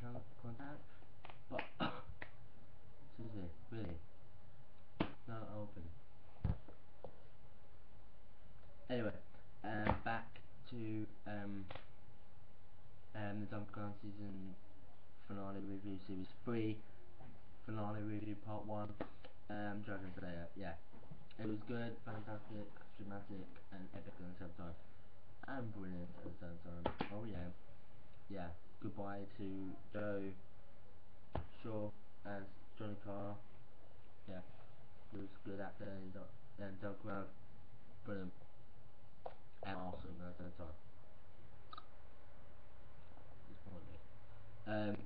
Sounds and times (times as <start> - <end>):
Speech: 0.0 - 0.9, 3.1 - 4.1, 5.1 - 6.0, 8.9 - 11.9, 13.1 - 14.6, 15.2 - 16.9, 17.6 - 24.8, 25.4 - 27.6, 28.3 - 30.4, 31.4 - 33.5, 34.2 - 37.4, 38.0 - 38.4, 39.6 - 40.8, 43.4 - 45.0.